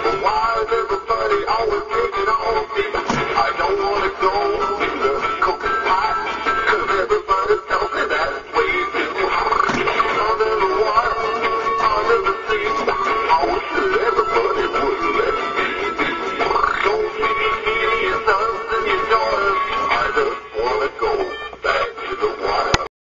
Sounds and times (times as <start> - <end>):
Music: 0.0 - 22.9
Synthetic singing: 0.0 - 22.9.